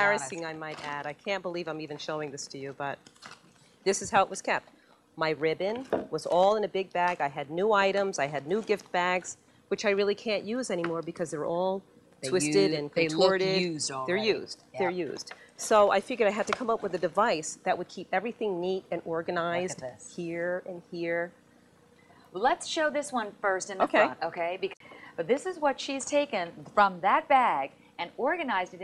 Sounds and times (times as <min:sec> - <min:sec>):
Speech: 0:00.0 - 0:03.0, 0:05.2 - 0:21.3, 0:22.4 - 0:28.8.